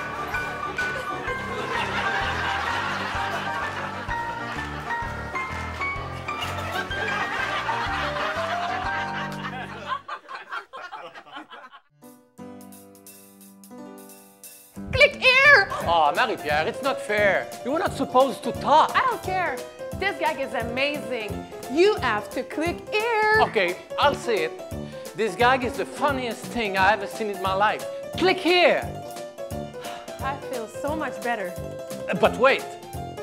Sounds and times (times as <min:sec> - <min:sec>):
Laughter: 0:01.2 - 0:05.0, 0:06.4 - 0:11.9.